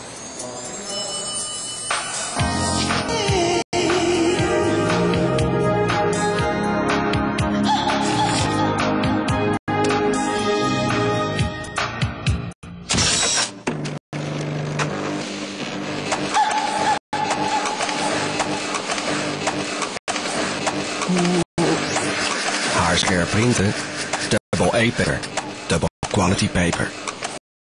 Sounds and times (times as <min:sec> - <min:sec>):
Printer: 0:14.4 - 0:21.1, 0:21.8 - 0:27.4
Speech: 0:22.8 - 0:27.0.